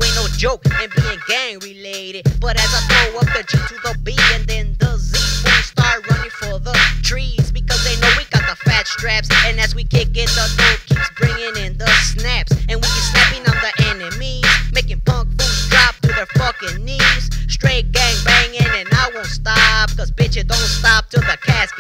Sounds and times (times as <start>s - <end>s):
Music: 0.0s - 21.8s.